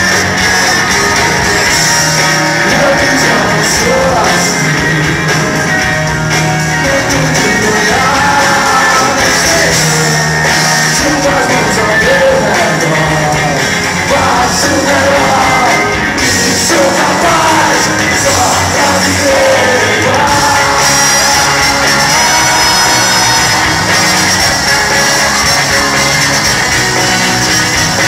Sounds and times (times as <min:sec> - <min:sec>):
Rock music: 0:00.0 - 0:28.0.